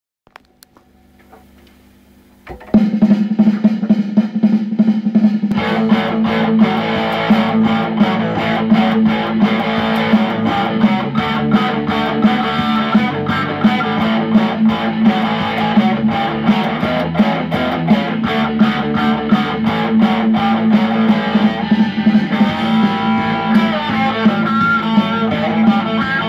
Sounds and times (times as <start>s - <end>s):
Inside, small room: 0.3s - 26.2s
Drum kit: 2.4s - 26.2s
Guitar: 2.5s - 4.2s, 5.4s - 26.2s
Heavy metal: 5.5s - 26.2s.